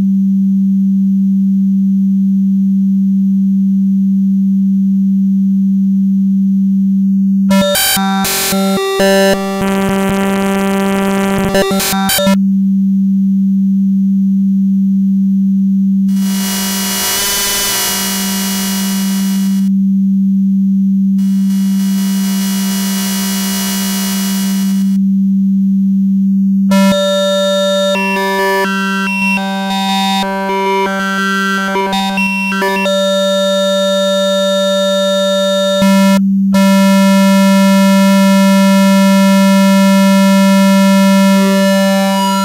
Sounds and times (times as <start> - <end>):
Synthesizer: 7.5 - 12.4, 26.7 - 35.9, 40.5 - 42.4.